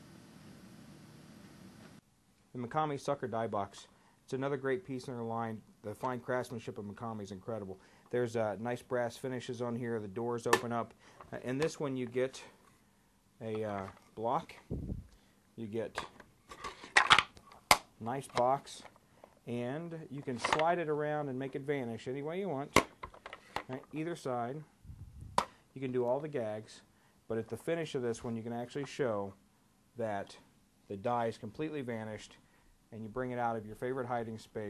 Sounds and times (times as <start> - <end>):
Speech: 2.5 - 12.6, 13.4 - 14.7, 15.6 - 16.2, 18.0 - 18.9, 19.5 - 22.9, 23.7 - 24.7, 25.8 - 29.4, 30.0 - 34.6.